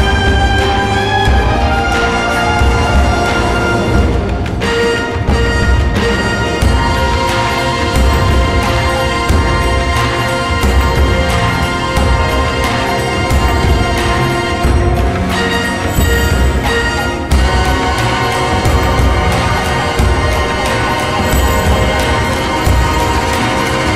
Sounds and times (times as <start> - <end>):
Soundtrack music: 0.0 - 23.9
Theme music: 0.0 - 23.9.